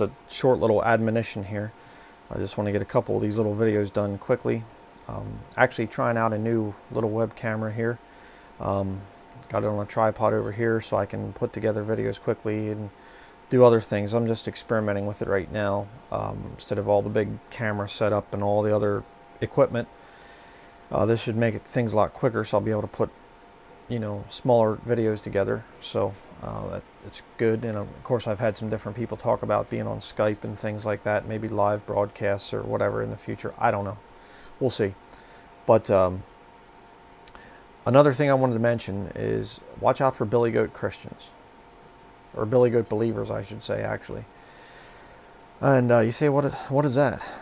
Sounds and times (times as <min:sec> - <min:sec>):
Speech: 0:00.0 - 0:08.0, 0:08.6 - 0:19.9, 0:20.9 - 0:23.2, 0:23.9 - 0:34.0, 0:34.6 - 0:35.0, 0:35.7 - 0:36.3, 0:37.8 - 0:41.4, 0:42.3 - 0:44.3, 0:45.6 - 0:47.4.